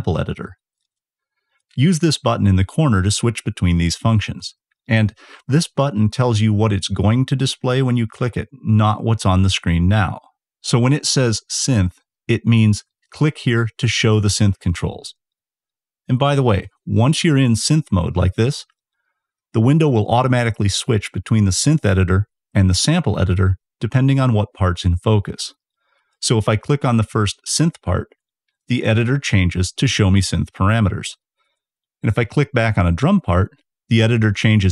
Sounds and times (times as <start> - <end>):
Speech: 0.0 - 0.6, 1.8 - 15.2, 16.1 - 18.7, 19.5 - 25.6, 26.2 - 31.2, 32.0 - 34.7.